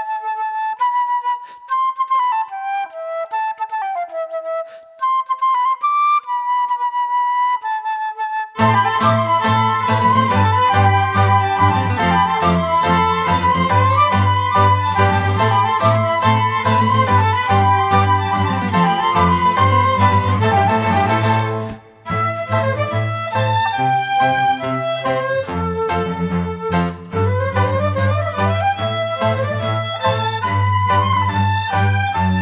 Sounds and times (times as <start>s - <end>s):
Music: 0.0s - 32.4s.